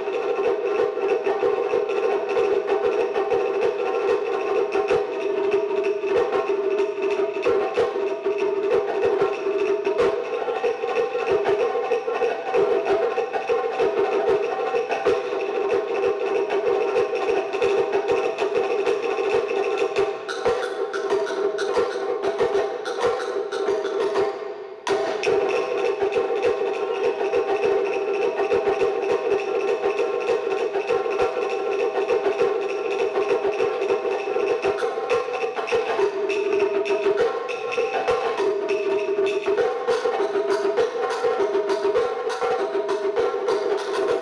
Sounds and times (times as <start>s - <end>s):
Wood block: 0.0s - 44.2s.